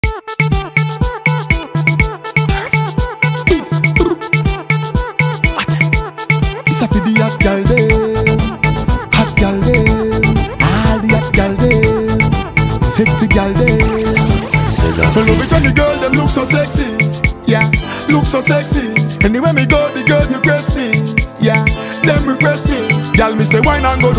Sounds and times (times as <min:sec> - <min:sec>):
Afrobeat: 0:00.0 - 0:24.1.